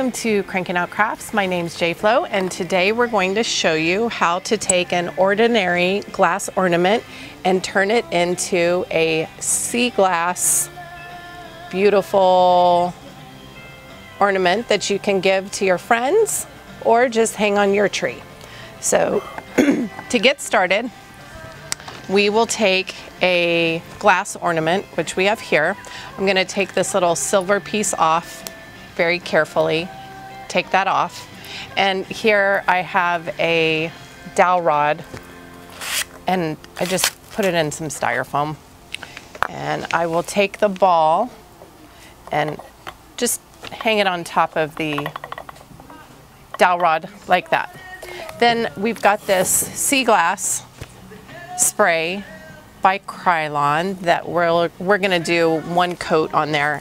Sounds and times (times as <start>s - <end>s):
Music: 0.0s - 56.8s.